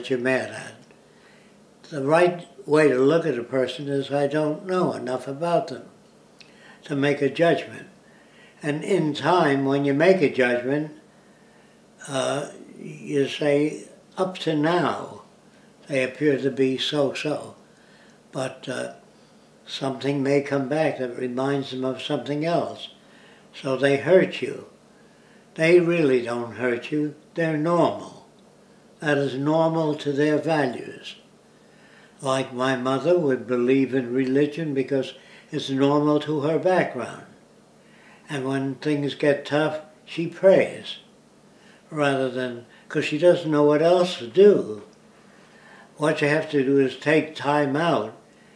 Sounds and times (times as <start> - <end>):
Speech: 0.0 - 0.9, 1.8 - 5.9, 6.8 - 8.0, 8.6 - 11.0, 12.0 - 17.6, 18.3 - 19.0, 19.7 - 24.8, 25.6 - 28.3, 29.0 - 31.2, 32.2 - 37.4, 38.3 - 41.1, 41.9 - 44.9, 46.0 - 48.2
Inside, small room: 0.0 - 48.5.